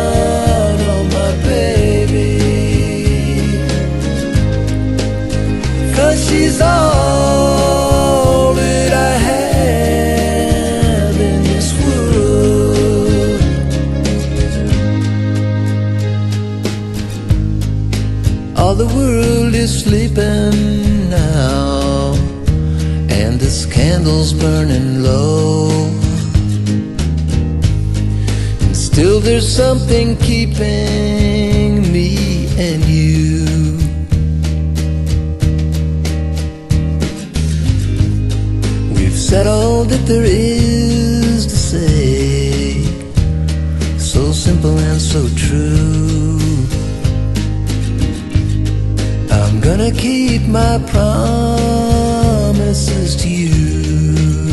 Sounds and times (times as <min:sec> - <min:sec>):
Song: 0:00.0 - 0:54.5.